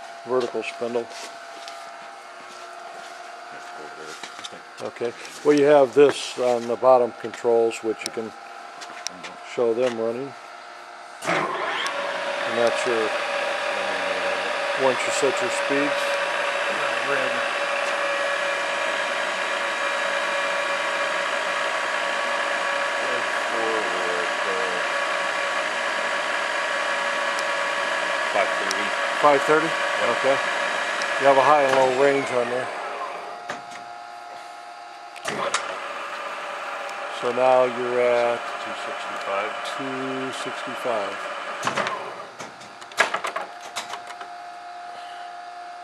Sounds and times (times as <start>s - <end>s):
Speech: 0.2s - 1.1s, 3.6s - 8.4s, 9.1s - 10.4s, 12.5s - 13.1s, 13.8s - 17.5s, 23.0s - 24.9s, 28.3s - 30.4s, 31.2s - 32.7s, 37.1s - 41.2s.